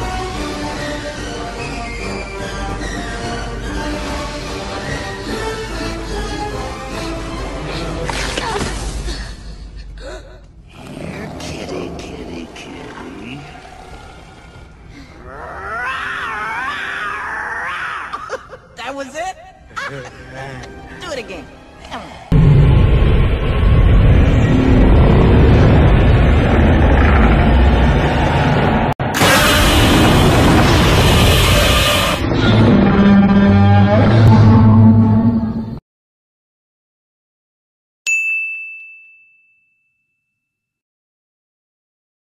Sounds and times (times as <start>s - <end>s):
Roar: 10.7s - 17.6s, 32.0s - 35.4s.